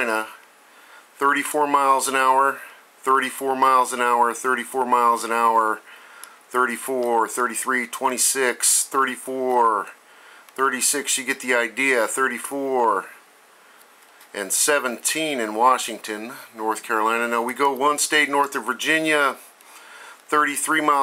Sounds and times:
Speech: 0.0 - 0.4, 1.2 - 5.8, 6.5 - 10.0, 10.6 - 13.2, 14.3 - 19.5, 20.3 - 21.0.

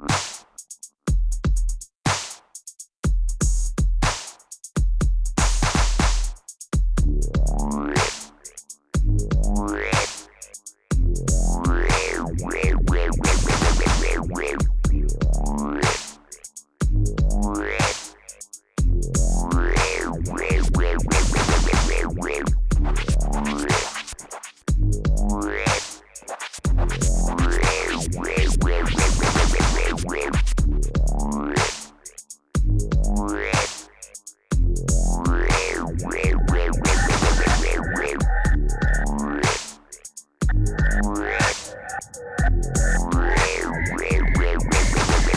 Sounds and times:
Dubstep: 7.4 - 8.7, 9.3 - 16.6, 17.3 - 45.3.

